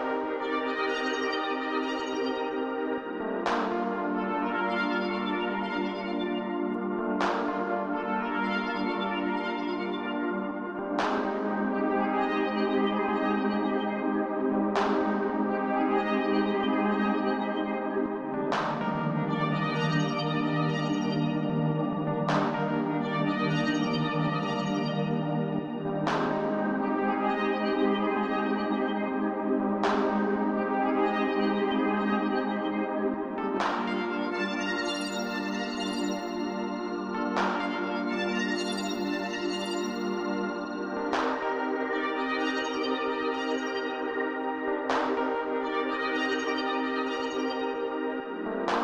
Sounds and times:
Music: 0.0s - 48.8s.

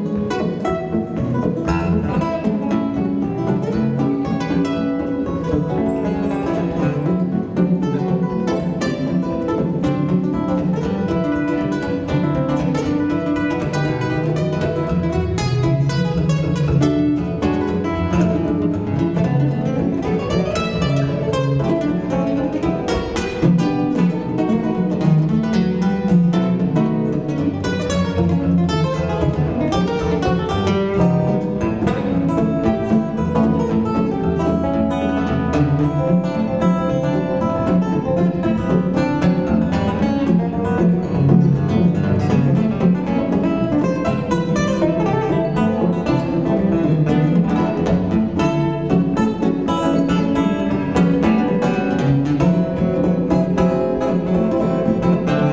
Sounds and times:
Guitar: 0.0s - 55.5s
String section: 0.0s - 55.5s.

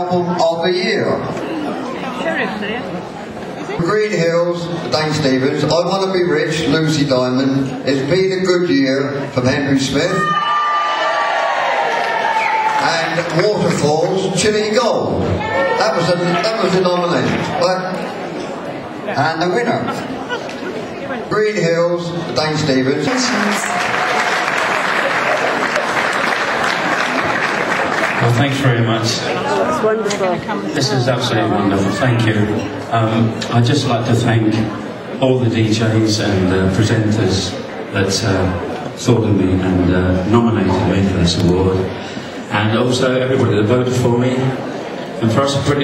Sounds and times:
Speech: 0.0s - 1.4s, 3.8s - 10.3s, 12.8s - 18.0s, 19.1s - 20.0s, 21.3s - 23.7s, 28.2s - 41.9s, 42.5s - 44.6s, 45.2s - 45.8s.

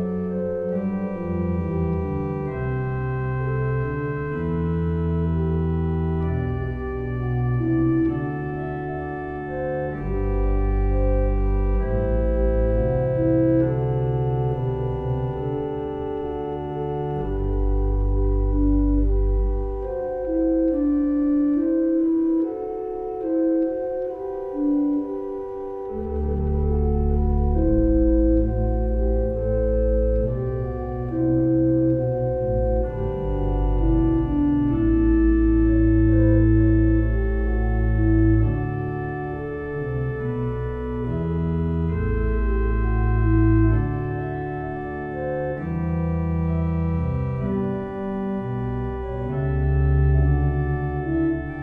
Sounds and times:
Organ: 0.0s - 51.6s.

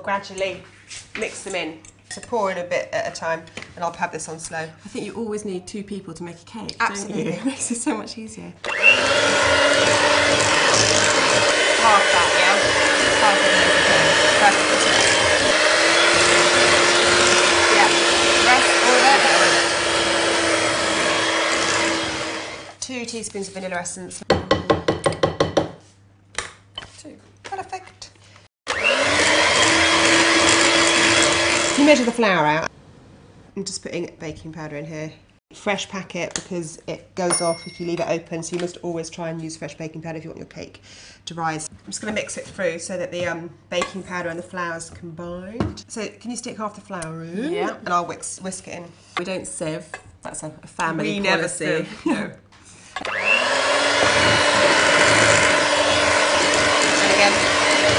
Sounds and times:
Blender: 8.6s - 22.8s, 28.7s - 32.4s, 53.0s - 57.9s.

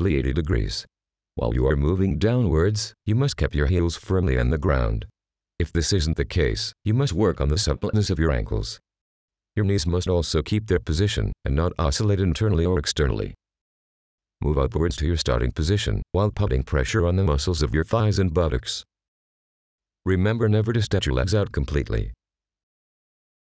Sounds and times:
Speech: 0.0s - 8.8s, 9.6s - 13.4s, 14.4s - 18.9s, 20.1s - 22.2s.

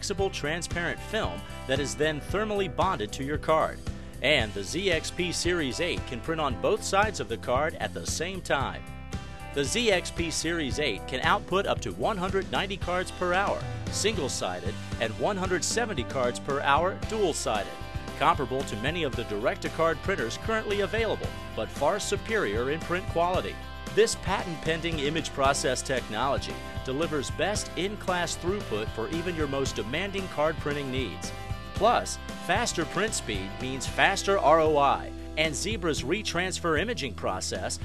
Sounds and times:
Speech: 0.0s - 8.8s, 9.6s - 37.8s
Music: 0.0s - 37.8s.

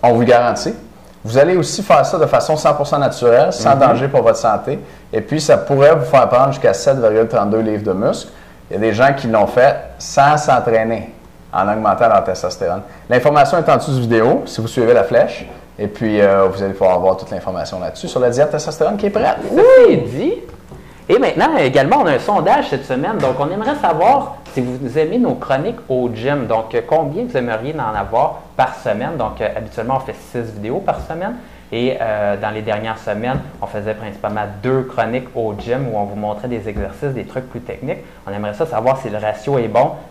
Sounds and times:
Speech: 0.0s - 40.1s.

